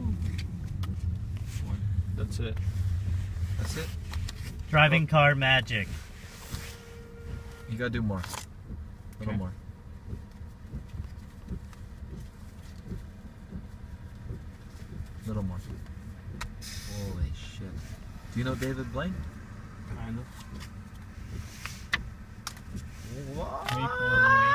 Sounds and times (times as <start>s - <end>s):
Vehicle: 0.0s - 24.5s.